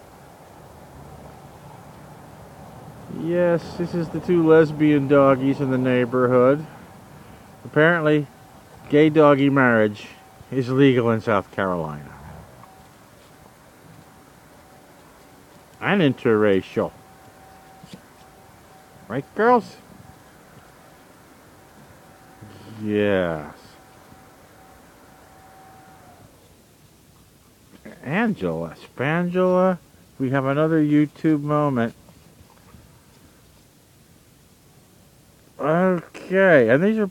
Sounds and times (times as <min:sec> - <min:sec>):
Speech: 0:03.1 - 0:06.7, 0:07.7 - 0:08.3, 0:08.9 - 0:12.3, 0:15.8 - 0:17.0, 0:19.1 - 0:19.9, 0:22.4 - 0:23.8, 0:27.8 - 0:32.0, 0:35.6 - 0:37.1.